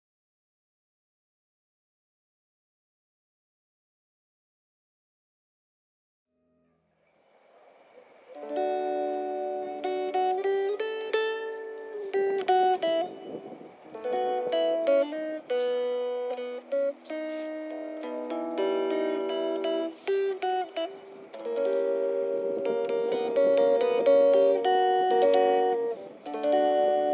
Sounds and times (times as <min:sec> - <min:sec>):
Mandolin: 0:08.3 - 0:27.1.